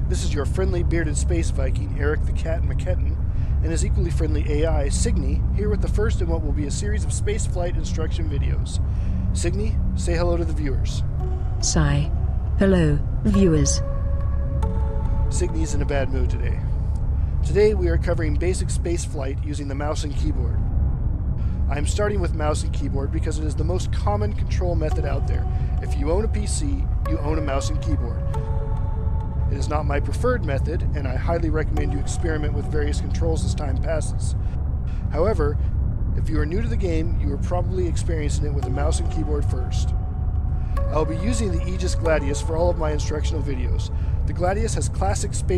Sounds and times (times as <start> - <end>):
Speech: 0.0 - 8.8, 9.4 - 11.0, 11.6 - 13.8, 15.3 - 16.6, 17.4 - 20.6, 21.7 - 28.2, 29.5 - 34.4, 35.0 - 35.6, 36.2 - 39.9, 40.9 - 45.5
Music: 0.0 - 45.5.